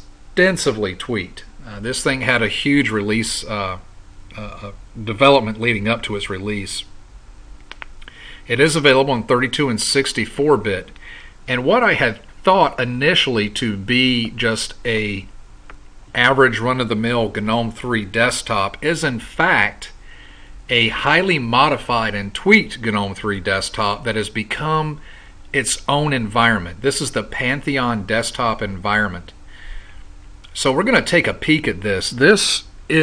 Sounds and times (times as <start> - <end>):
Speech: 0.0 - 6.9, 8.4 - 15.3, 16.1 - 20.0, 20.7 - 29.4, 30.5 - 33.0.